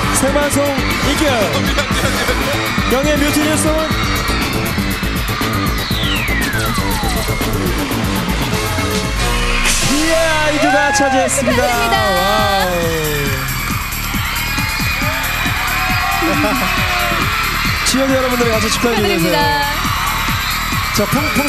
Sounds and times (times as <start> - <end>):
Music: 0.0 - 21.4.